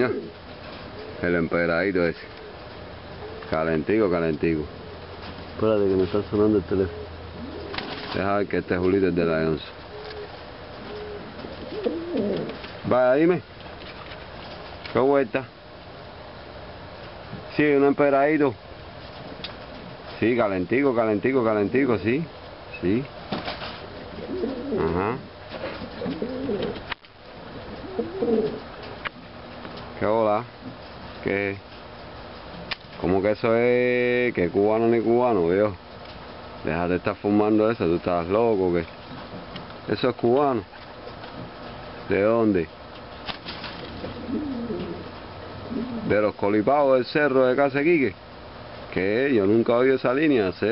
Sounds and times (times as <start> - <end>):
Speech: 1.2 - 2.3, 3.5 - 4.7, 5.6 - 7.0, 8.1 - 9.8, 12.9 - 13.5, 14.9 - 15.5, 17.5 - 18.6, 20.2 - 23.1, 24.8 - 25.3, 30.0 - 30.6, 31.2 - 31.6, 33.0 - 35.8, 36.6 - 38.9, 39.9 - 40.7, 42.1 - 42.7, 46.1 - 48.2, 48.9 - 50.7
Pigeon, dove: 9.9 - 12.8, 23.4 - 26.9, 27.5 - 29.0, 43.2 - 46.2.